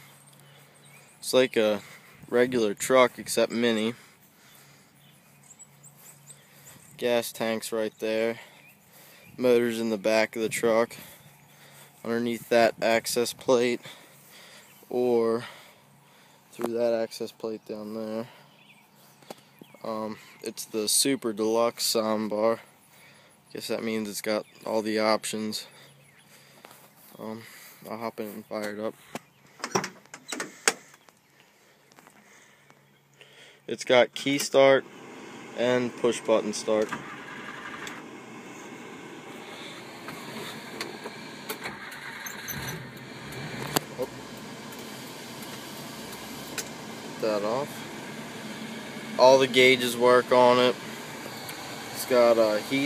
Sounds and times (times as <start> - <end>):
Speech: 1.2 - 4.0, 7.0 - 8.5, 9.4 - 11.0, 12.0 - 13.9, 14.9 - 15.5, 16.6 - 18.3, 19.8 - 22.7, 23.5 - 25.7, 27.1 - 29.0, 33.7 - 34.8, 35.6 - 37.0, 47.2 - 47.8, 49.2 - 50.8, 52.0 - 52.8.